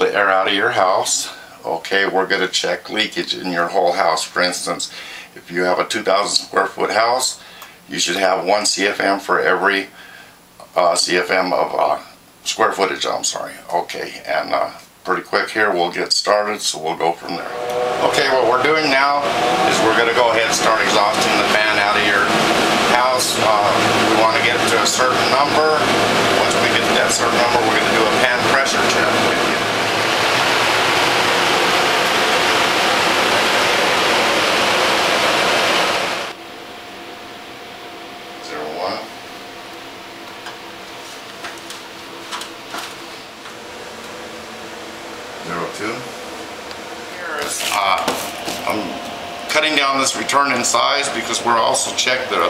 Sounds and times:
Mechanical fan: 0.0 - 52.5.

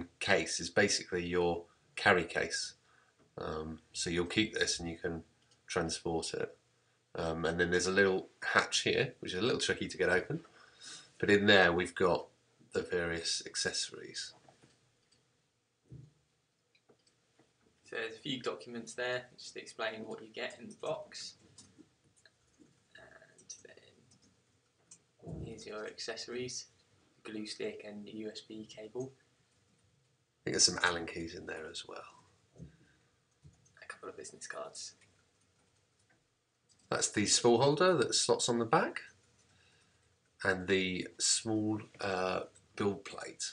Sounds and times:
Speech: 0.0 - 2.8, 3.4 - 6.6, 7.2 - 10.5, 11.2 - 14.4, 17.9 - 21.4, 25.2 - 29.2, 30.5 - 32.2, 33.8 - 35.0, 36.9 - 39.2, 40.4 - 43.5.

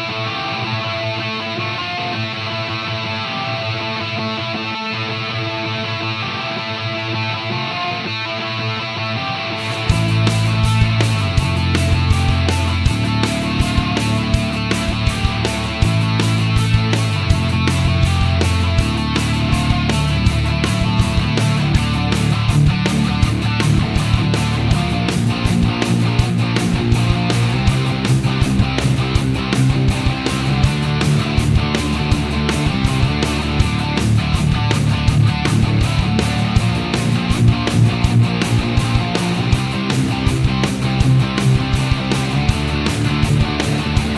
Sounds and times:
Music: 0.0 - 44.1.

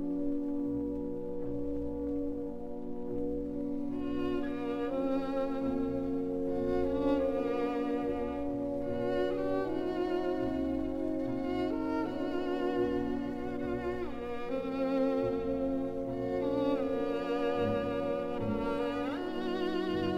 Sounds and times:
Violin, fiddle: 0.0 - 20.1.

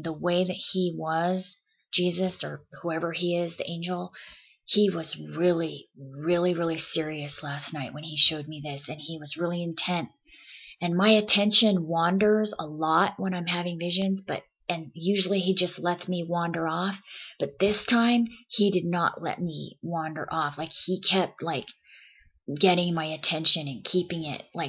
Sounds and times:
Speech: 0.0 - 21.8, 22.5 - 24.6.

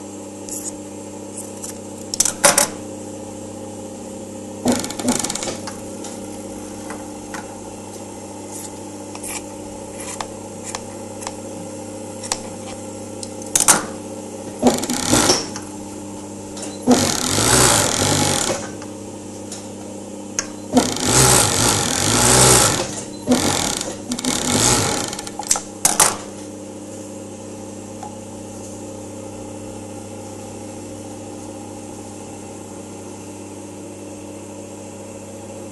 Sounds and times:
Sewing machine: 4.7 - 5.7, 14.6 - 15.6, 16.8 - 18.8, 20.7 - 25.6.

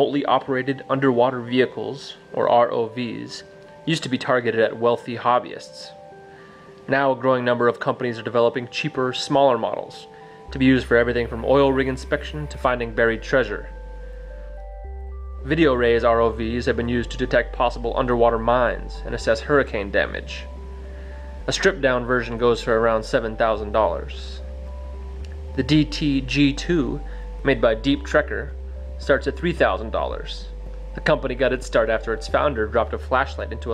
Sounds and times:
Speech: 0.0 - 6.0, 6.9 - 13.7, 15.4 - 20.5, 21.5 - 24.4, 25.6 - 33.7
Music: 0.0 - 33.7.

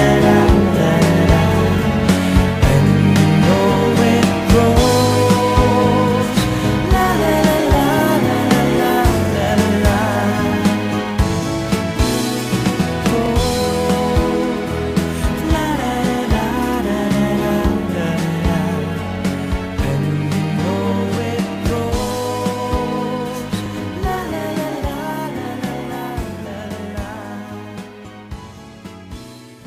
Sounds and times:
Singing: 0.0 - 11.2, 12.8 - 28.1
Pop music: 0.0 - 29.6.

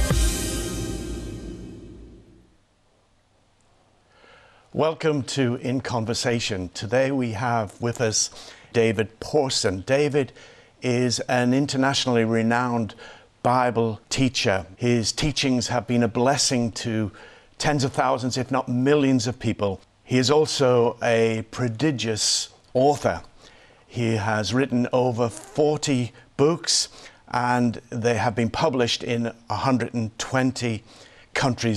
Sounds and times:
Speech: 4.8 - 23.3, 23.9 - 31.7.

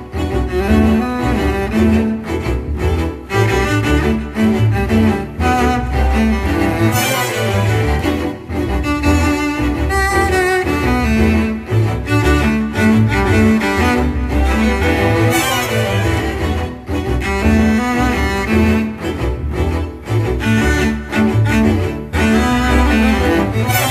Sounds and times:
Wedding music: 2.8 - 10.4, 13.0 - 19.2.

